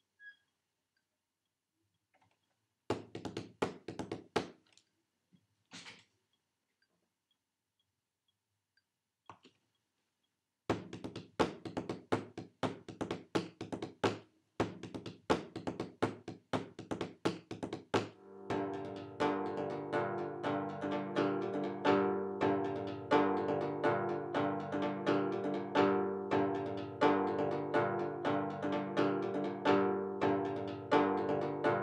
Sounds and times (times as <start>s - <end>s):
Inside, small room: 0.0s - 31.8s
Musical instrument: 18.2s - 31.8s.